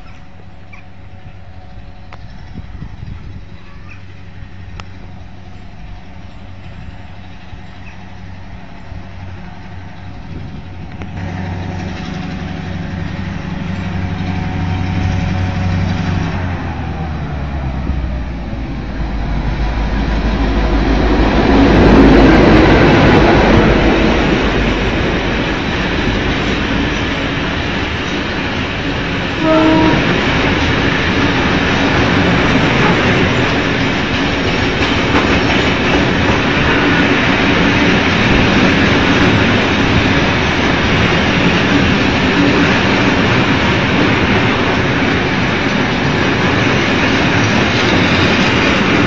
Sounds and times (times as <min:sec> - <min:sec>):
Railroad car, train wagon: 0:00.0 - 0:49.0
Train: 0:00.0 - 0:49.0.